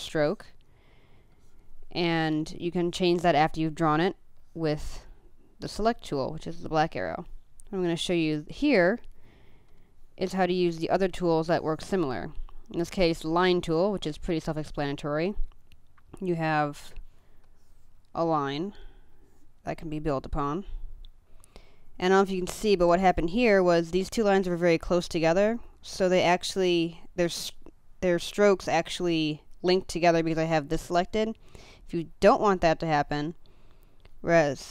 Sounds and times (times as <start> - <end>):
Speech: 0.0 - 0.6, 1.9 - 9.1, 10.2 - 15.5, 16.2 - 17.0, 18.2 - 18.8, 19.7 - 20.8, 22.0 - 33.4, 34.2 - 34.7.